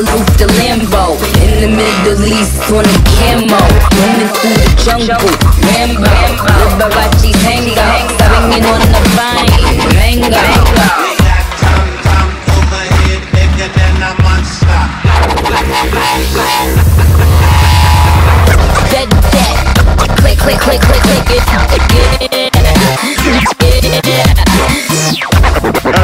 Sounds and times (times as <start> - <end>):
Dubstep: 0.0 - 26.0.